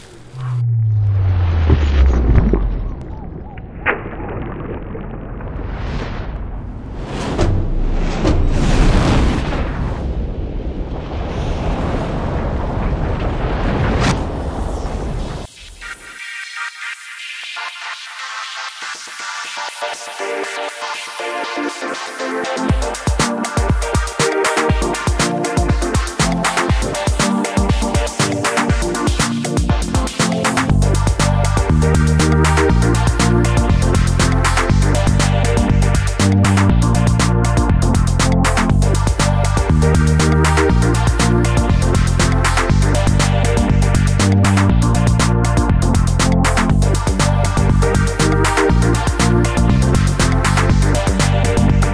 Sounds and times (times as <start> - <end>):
Music: 15.8 - 51.9.